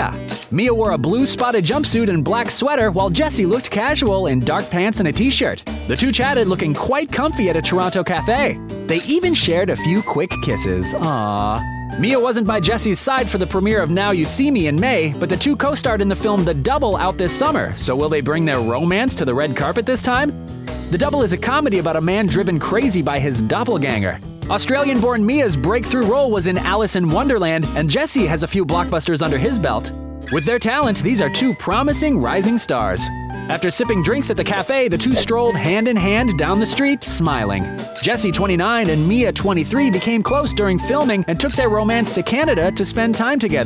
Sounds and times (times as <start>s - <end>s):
Speech: 0.0s - 20.3s, 20.9s - 43.6s
Music: 0.0s - 43.6s.